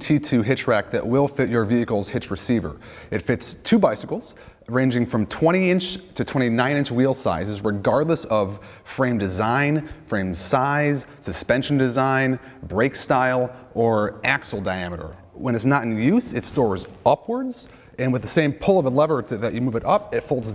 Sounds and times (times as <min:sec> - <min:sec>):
Speech: 0:00.0 - 0:20.5.